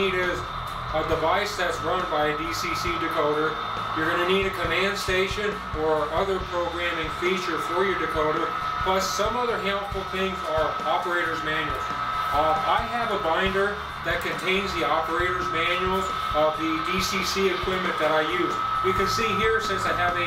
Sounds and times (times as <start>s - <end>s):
Music: 0.0s - 20.2s
Speech: 0.0s - 20.2s.